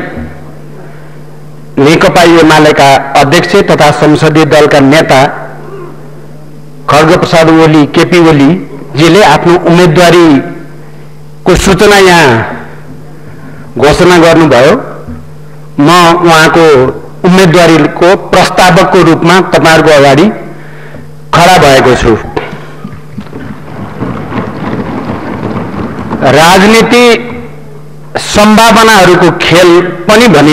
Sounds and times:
Narration, monologue: 0:00.0 - 0:23.8, 0:25.8 - 0:30.5
Male speech, man speaking: 0:01.8 - 0:05.5, 0:06.9 - 0:10.6, 0:11.5 - 0:12.6, 0:13.8 - 0:15.0, 0:15.8 - 0:20.4, 0:21.4 - 0:22.4, 0:26.2 - 0:27.5, 0:28.2 - 0:30.5.

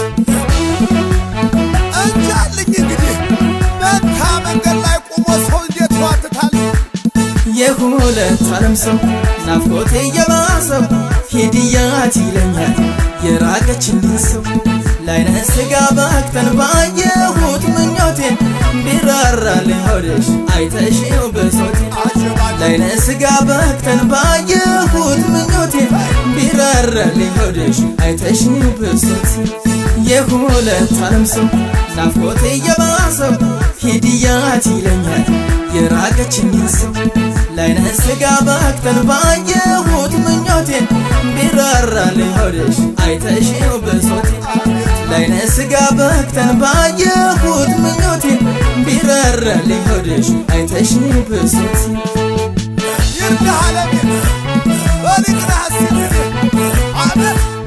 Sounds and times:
Soundtrack music: 0:00.0 - 0:57.6.

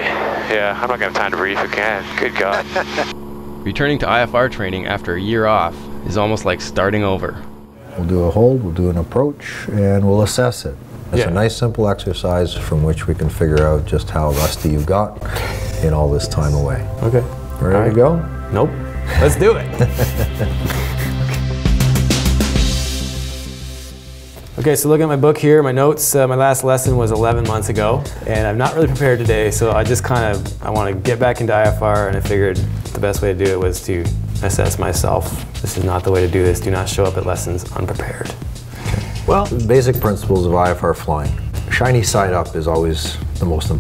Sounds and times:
Speech: 0:00.0 - 0:15.2, 0:15.8 - 0:19.7, 0:24.6 - 0:38.4, 0:39.3 - 0:43.8
Music: 0:00.5 - 0:07.8, 0:11.2 - 0:43.8.

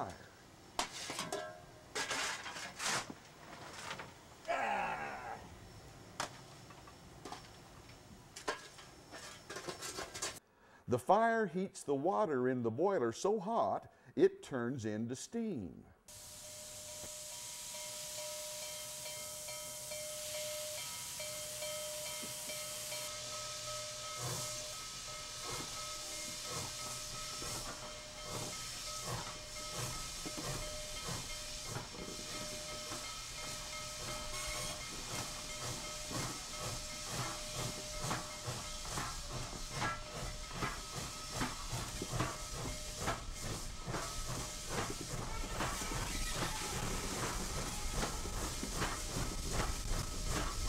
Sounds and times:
Speech: 0:10.9 - 0:16.0.

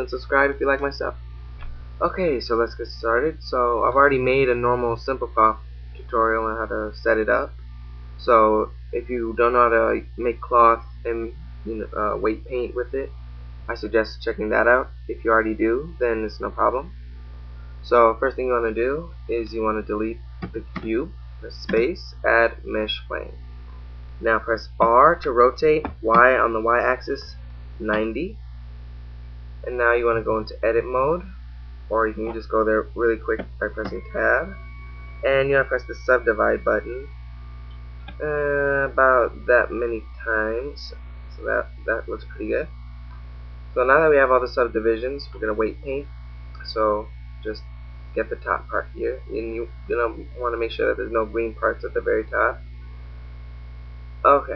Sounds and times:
Speech: 0:00.0 - 0:01.2, 0:02.0 - 0:07.5, 0:08.2 - 0:13.1, 0:13.7 - 0:16.9, 0:17.8 - 0:23.4, 0:24.2 - 0:28.4, 0:29.7 - 0:31.3, 0:31.9 - 0:34.6, 0:35.2 - 0:37.1, 0:38.1 - 0:42.7, 0:43.8 - 0:47.6, 0:48.2 - 0:52.6, 0:54.3 - 0:54.5.

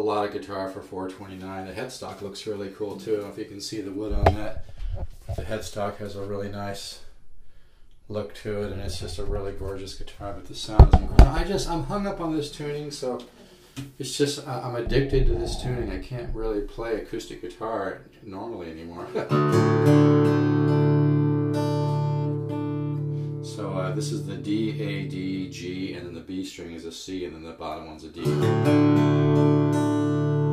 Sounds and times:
Speech: 0:00.0 - 0:04.6, 0:05.3 - 0:07.1, 0:08.1 - 0:13.3, 0:13.9 - 0:19.4, 0:23.4 - 0:28.5.

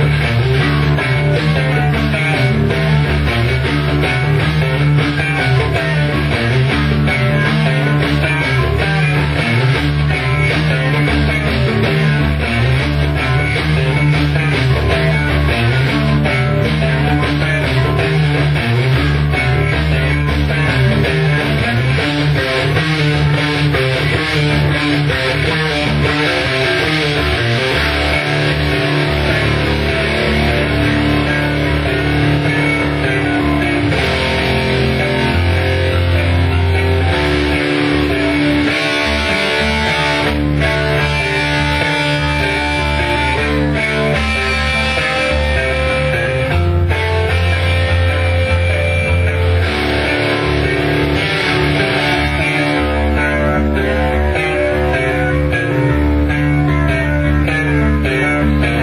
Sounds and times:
Bass guitar: 0:00.0 - 0:58.8
Strum: 0:00.0 - 0:58.8.

